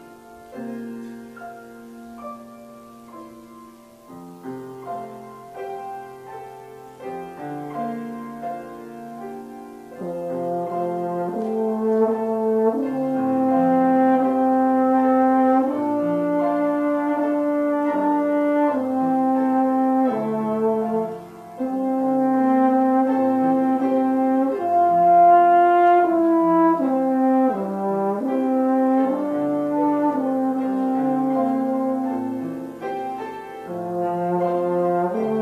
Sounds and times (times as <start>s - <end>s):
French horn: 0.0s - 35.4s.